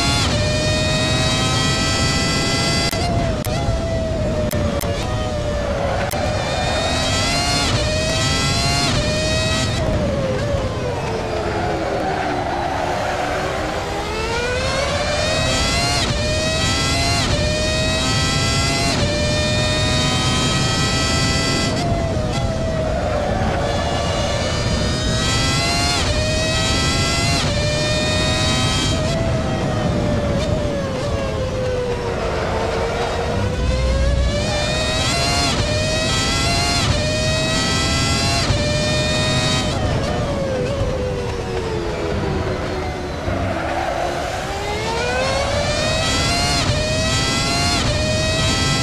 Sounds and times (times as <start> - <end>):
Accelerating, revving, vroom: 0.0 - 48.8
Car: 0.0 - 48.8
Medium engine (mid frequency): 0.0 - 48.8.